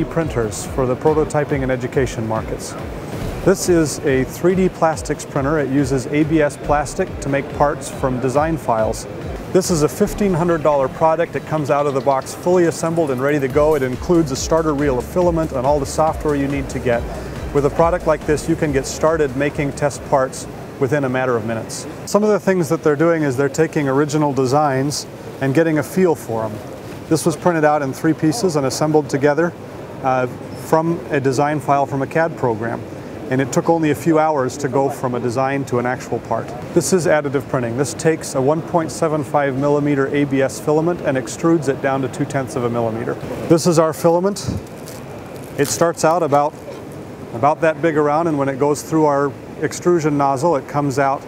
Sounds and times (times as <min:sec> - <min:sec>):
Speech: 0:00.0 - 0:02.9, 0:03.5 - 0:44.6, 0:45.6 - 0:46.8, 0:47.4 - 0:51.2
Music: 0:00.0 - 0:20.4.